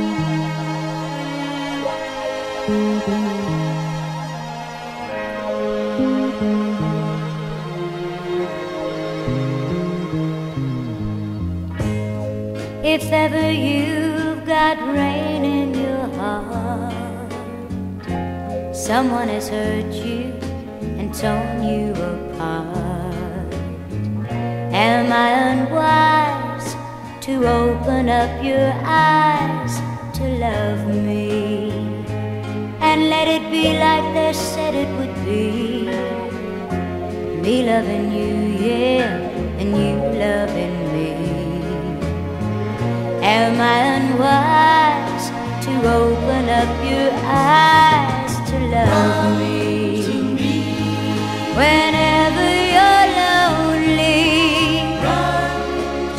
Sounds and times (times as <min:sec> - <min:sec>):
Music: 0:00.0 - 0:56.1.